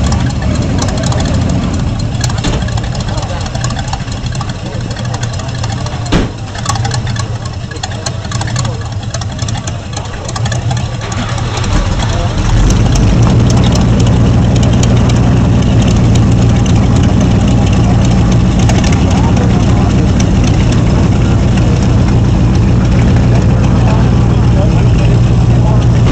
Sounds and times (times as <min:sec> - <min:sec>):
Truck: 0:00.0 - 0:26.1
Speech: 0:02.5 - 0:03.9, 0:04.5 - 0:09.0, 0:09.6 - 0:13.0, 0:16.8 - 0:22.2, 0:22.8 - 0:26.1.